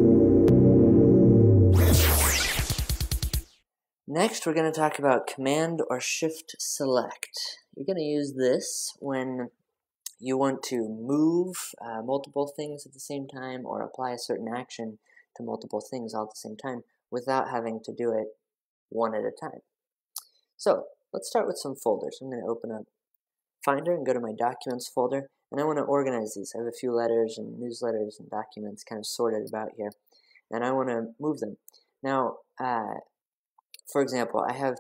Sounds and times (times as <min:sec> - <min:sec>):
Narration, monologue: 0:04.1 - 0:34.8.